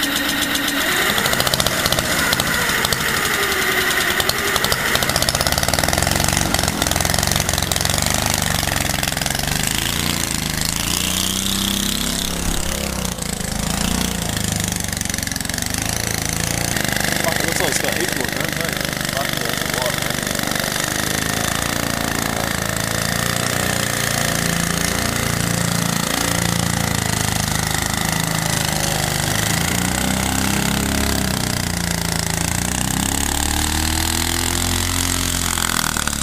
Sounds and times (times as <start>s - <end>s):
Motorboat, speedboat: 0.0s - 36.2s
Speech: 17.2s - 20.1s.